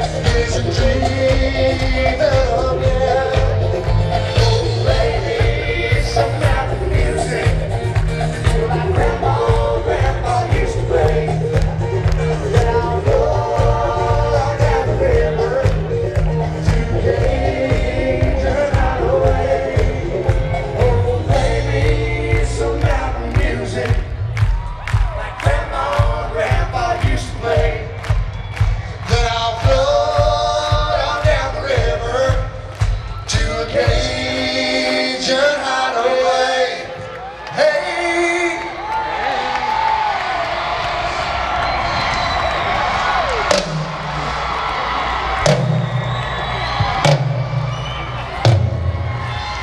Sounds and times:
Soundtrack music: 0:00.0 - 0:24.4.

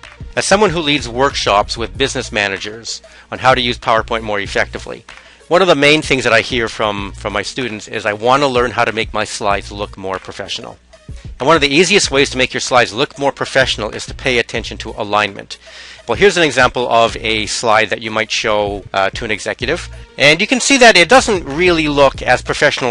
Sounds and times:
Speech: 0:00.4 - 0:10.8, 0:11.4 - 0:22.9.

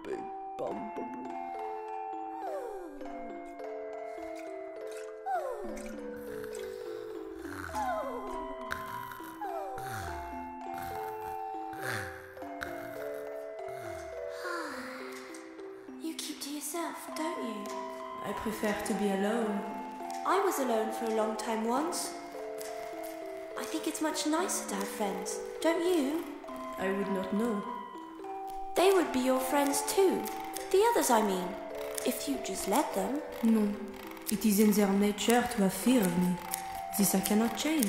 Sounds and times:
Music: 0:00.0 - 0:37.8
Speech: 0:23.6 - 0:26.2, 0:28.8 - 0:31.5, 0:32.1 - 0:36.4, 0:37.0 - 0:37.8.

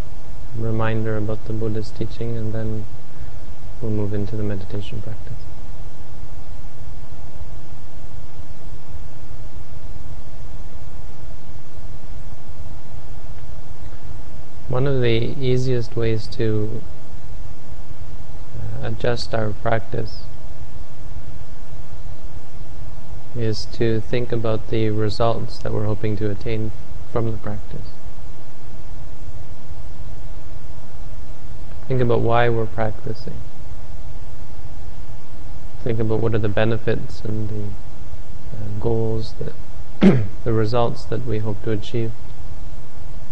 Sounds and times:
Speech: 0:00.6 - 0:02.9, 0:03.8 - 0:05.5, 0:14.7 - 0:16.9, 0:18.6 - 0:20.3, 0:23.4 - 0:28.0, 0:31.9 - 0:33.4, 0:35.8 - 0:37.8, 0:38.5 - 0:42.2.

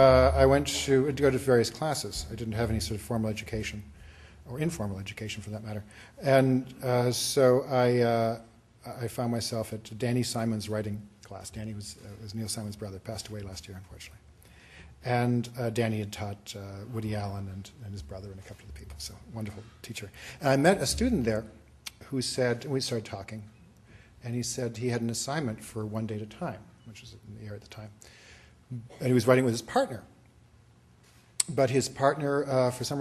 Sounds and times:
Speech: 0:00.0 - 0:03.9, 0:04.5 - 0:14.2, 0:15.0 - 0:23.6, 0:24.2 - 0:28.0, 0:28.7 - 0:30.2, 0:31.4 - 0:33.0.

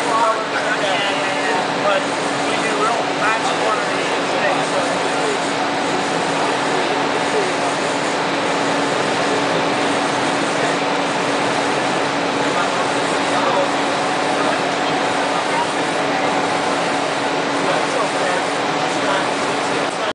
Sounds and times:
Speech: 0:00.0 - 0:05.5, 0:06.6 - 0:08.0, 0:12.4 - 0:16.4, 0:17.6 - 0:20.1.

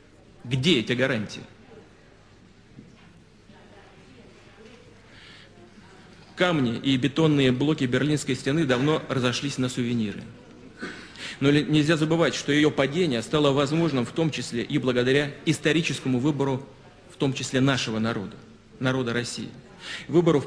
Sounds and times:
Narration, monologue: 0:00.0 - 0:01.7, 0:05.0 - 0:20.4
Male speech, man speaking: 0:00.4 - 0:01.6, 0:06.4 - 0:10.4, 0:11.4 - 0:20.4.

